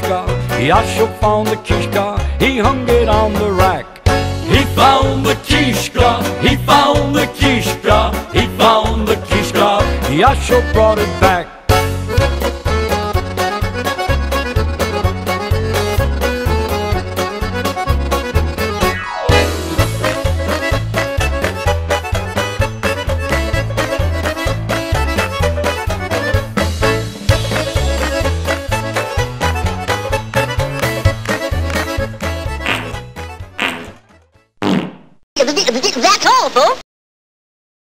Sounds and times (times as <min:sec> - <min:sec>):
Music: 0:00.0 - 0:34.6
Speech: 0:35.4 - 0:36.8.